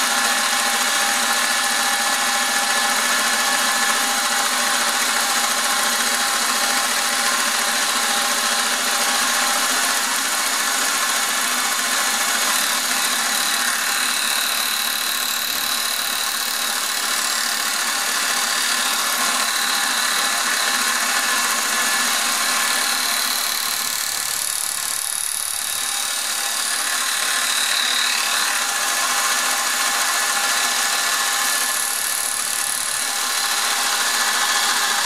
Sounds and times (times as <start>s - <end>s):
Power tool: 0.0s - 35.0s.